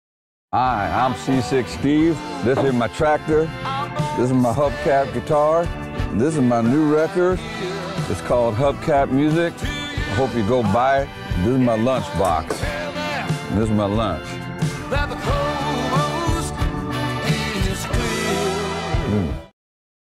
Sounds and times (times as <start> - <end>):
Speech: 0.6 - 3.5, 4.2 - 7.4, 8.1 - 9.5, 10.1 - 12.6, 13.5 - 14.3
Music: 0.6 - 19.6.